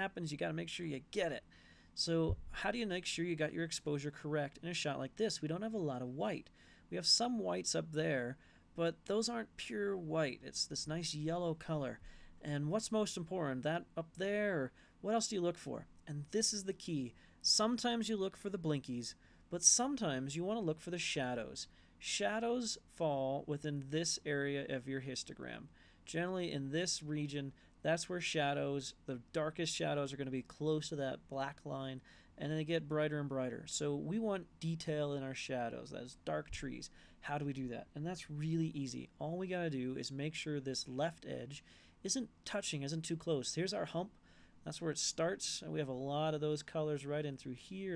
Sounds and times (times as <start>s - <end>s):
Speech: 0.0s - 47.9s.